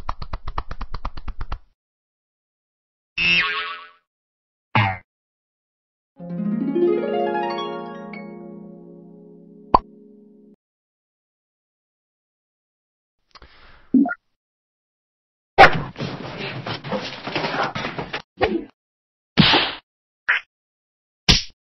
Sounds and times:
Whack, thwack: 19.4 - 19.8, 21.3 - 21.6.

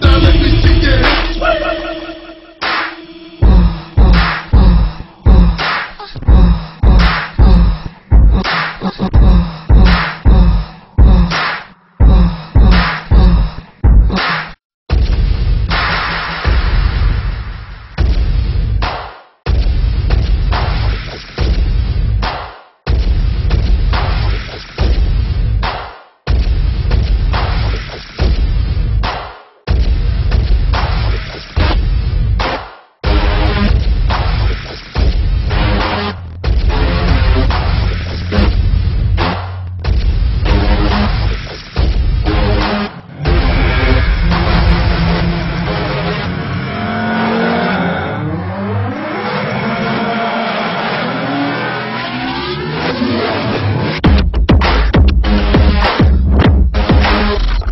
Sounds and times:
Dubstep: 0.0 - 22.2, 26.3 - 57.7.

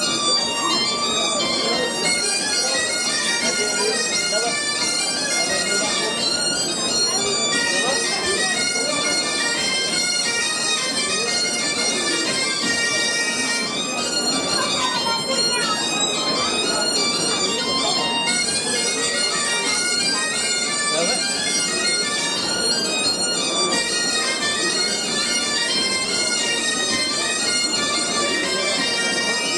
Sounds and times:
Music: 0.0 - 29.5
Speech: 0.0 - 29.5.

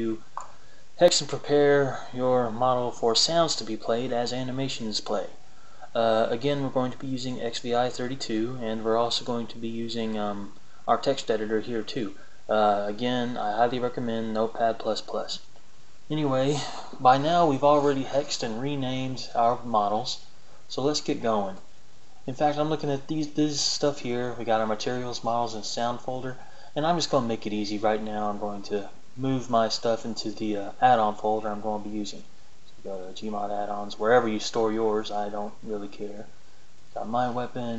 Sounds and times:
Speech: 0.0 - 15.5, 16.1 - 36.3, 37.0 - 37.7.

